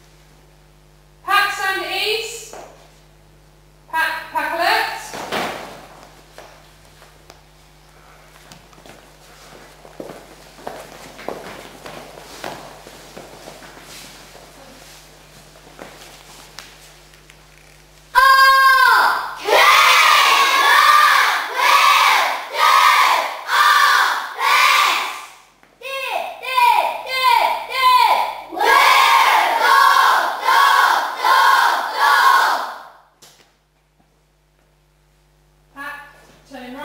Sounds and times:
Speech: 1.2 - 2.6, 3.9 - 5.2, 25.8 - 28.4, 35.8 - 36.8.

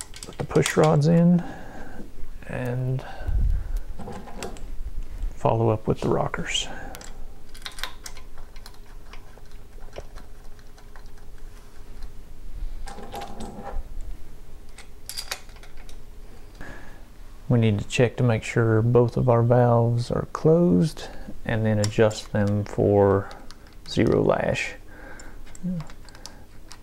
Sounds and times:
Speech: 0.4 - 1.5, 2.4 - 3.1, 5.4 - 6.9, 17.5 - 23.3, 23.9 - 24.8.

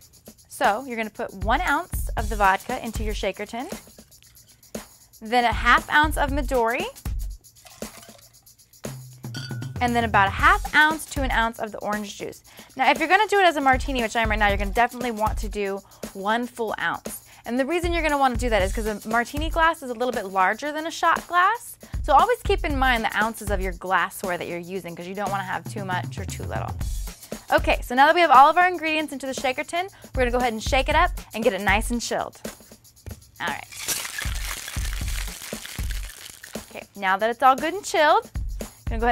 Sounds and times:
Music: 0.0 - 39.1
Speech: 0.6 - 3.8, 5.2 - 7.0, 9.8 - 26.8, 27.5 - 32.4, 33.4 - 33.7, 36.7 - 38.3.

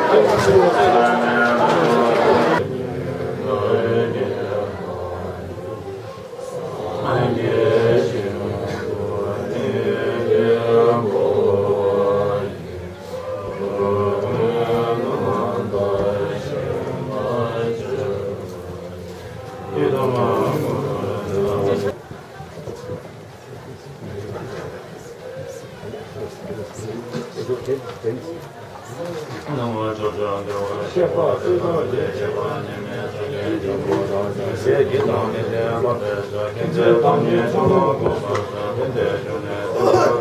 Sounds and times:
Chant: 0.0 - 40.2.

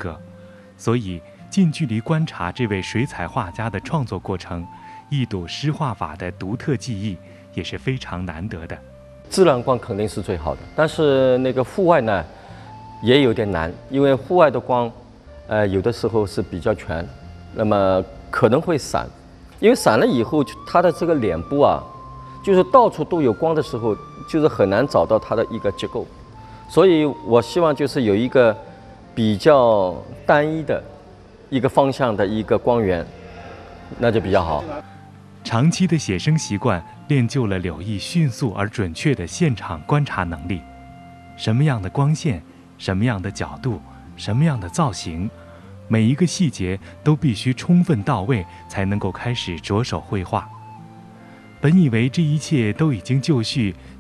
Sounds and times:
Speech: 0.0 - 0.2, 0.8 - 12.3, 13.0 - 21.9, 22.5 - 26.1, 26.7 - 28.6, 29.2 - 33.1, 34.0 - 34.8, 35.5 - 40.6, 41.4 - 45.3, 45.9 - 50.5, 51.6 - 53.8
Music: 0.0 - 54.0.

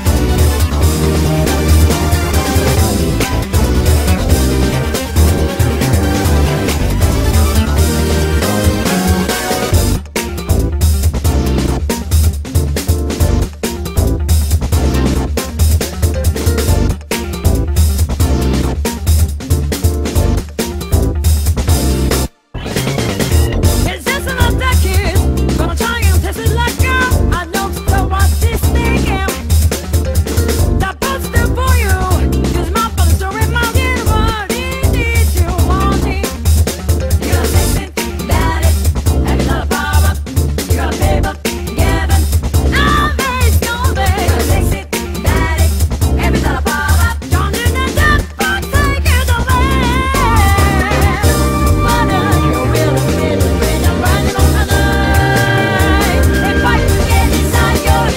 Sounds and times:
Background music: 0.0 - 58.1.

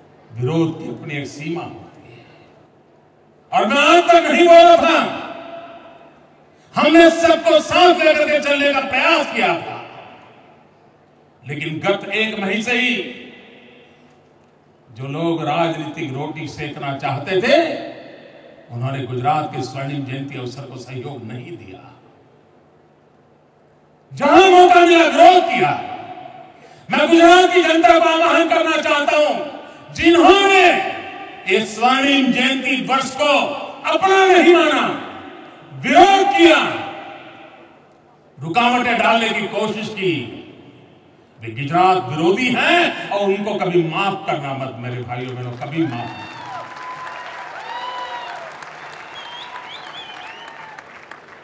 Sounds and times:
Narration, monologue: 0.0 - 46.4
Male speech, man speaking: 0.3 - 1.9, 3.5 - 5.2, 6.8 - 9.9, 11.4 - 13.1, 14.9 - 17.9, 18.7 - 22.0, 24.1 - 26.0, 26.9 - 35.1, 35.7 - 36.9, 38.4 - 40.5, 41.4 - 46.2.

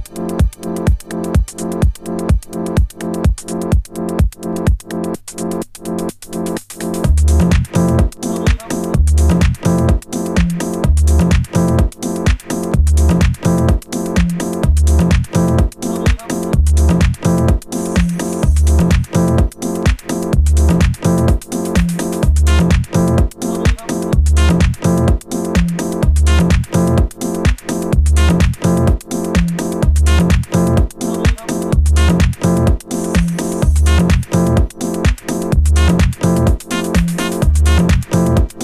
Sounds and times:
Techno: 0.0 - 38.6
Speech: 8.3 - 8.9, 15.9 - 16.5, 23.5 - 24.1, 31.1 - 31.7.

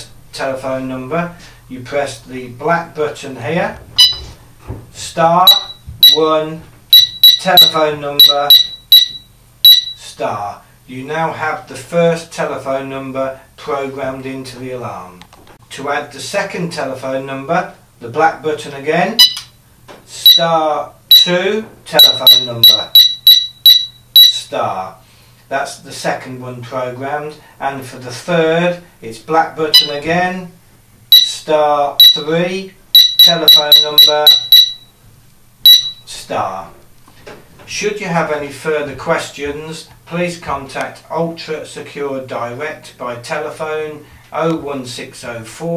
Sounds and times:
Speech: 0.0 - 3.9, 5.0 - 6.7, 7.4 - 8.6, 10.0 - 19.2, 20.1 - 23.0, 24.3 - 30.6, 31.2 - 34.4, 36.1 - 36.8, 37.7 - 45.7.

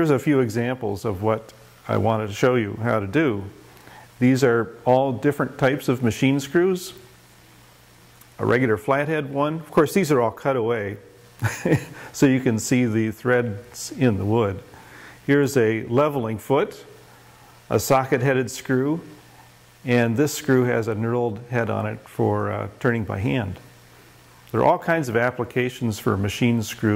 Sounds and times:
Speech: 0.0 - 3.6, 4.2 - 7.1, 8.4 - 14.7, 15.3 - 17.0, 17.7 - 19.2, 19.8 - 23.7, 24.5 - 26.9.

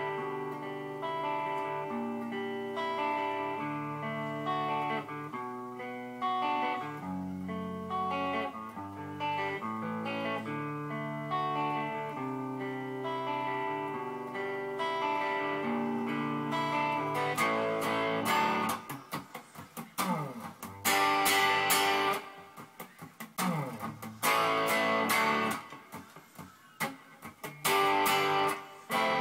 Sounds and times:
Electric guitar: 0.0 - 29.2.

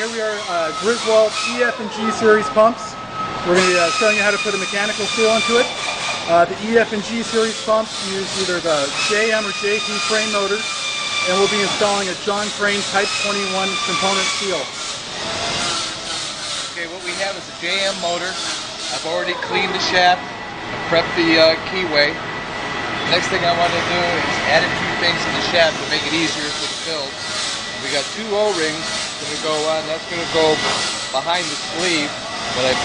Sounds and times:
Speech: 3.5 - 5.7, 6.3 - 10.6, 11.3 - 14.7, 16.8 - 20.2, 23.1 - 27.1, 27.8 - 30.6, 31.2 - 32.8.

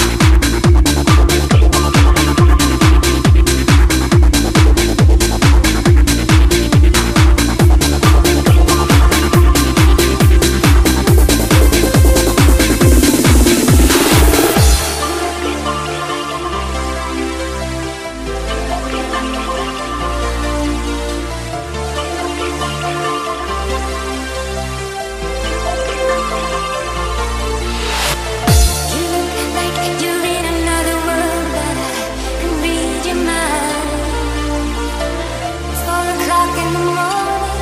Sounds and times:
Trance music: 0.0 - 37.6.

